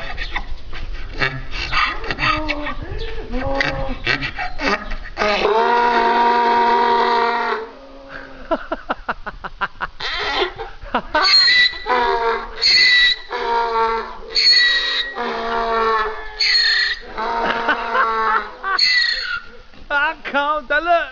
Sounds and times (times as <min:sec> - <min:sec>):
Animal: 0:01.1 - 0:08.4, 0:11.2 - 0:19.6.